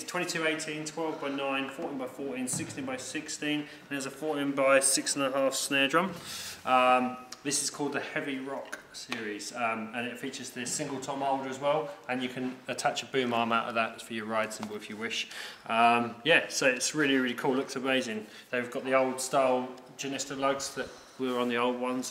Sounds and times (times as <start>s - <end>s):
Speech: 0.0s - 22.1s.